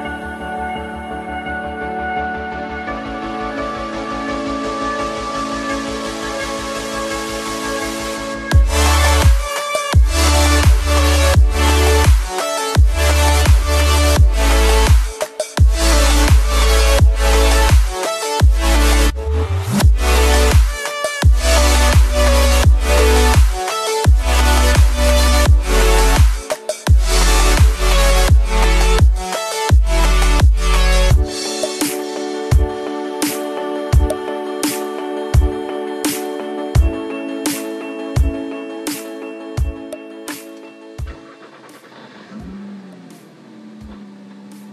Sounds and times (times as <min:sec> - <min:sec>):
Music: 0:00.0 - 0:44.7.